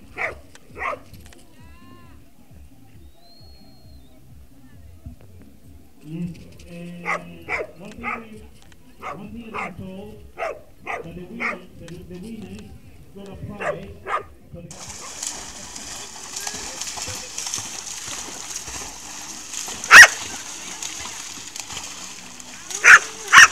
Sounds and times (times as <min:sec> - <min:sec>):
Bow-wow: 0:00.1 - 0:01.1, 0:07.0 - 0:08.3, 0:09.0 - 0:09.8, 0:10.4 - 0:11.6, 0:13.6 - 0:14.3, 0:19.9 - 0:20.3, 0:22.8 - 0:23.5
Speech: 0:04.2 - 0:14.8, 0:16.0 - 0:17.6.